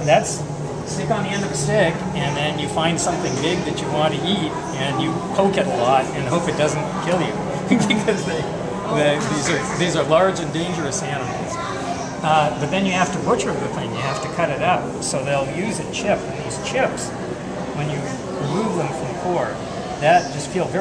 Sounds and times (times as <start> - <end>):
Speech: 0.0 - 11.6.